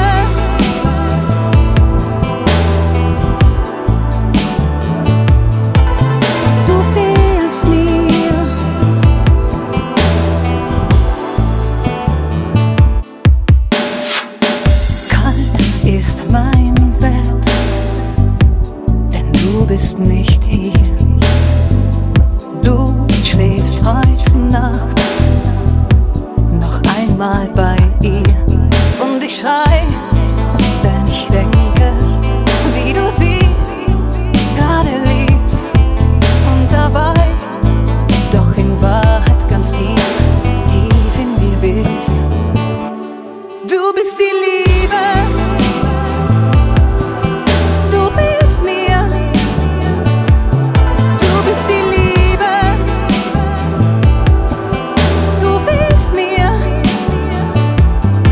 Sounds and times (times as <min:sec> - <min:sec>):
Dubstep: 0:00.0 - 0:43.2, 0:43.9 - 0:58.3.